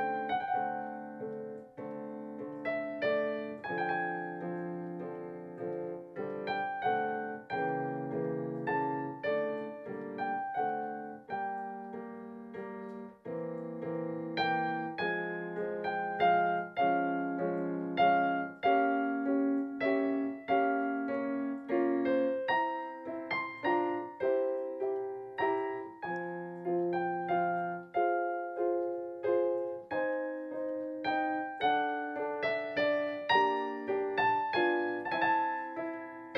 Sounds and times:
Piano: 0.0s - 36.3s.

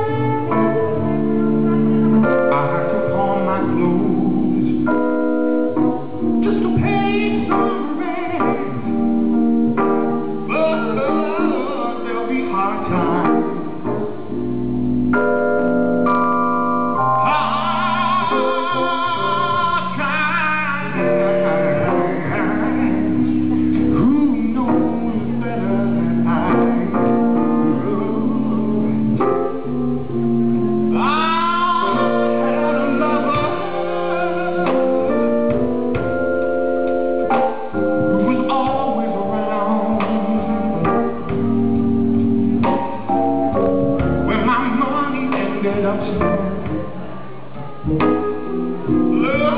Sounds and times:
Music: 0.0s - 49.5s.

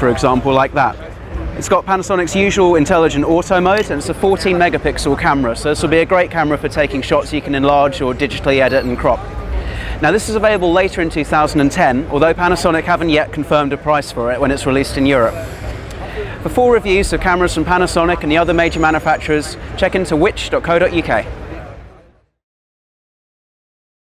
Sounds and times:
Speech: 0.0s - 9.3s, 10.0s - 22.1s.

